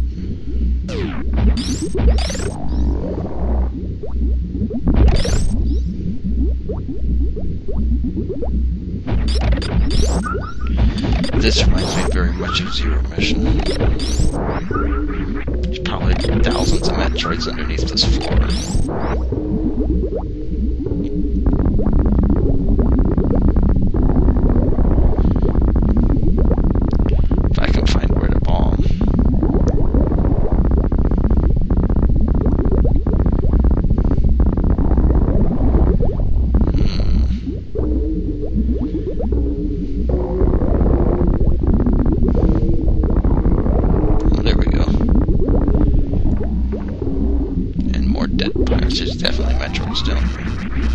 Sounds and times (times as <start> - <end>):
Speech: 10.8 - 13.6, 15.7 - 18.6, 27.6 - 28.9, 36.8 - 37.4, 44.2 - 45.0, 47.8 - 50.4.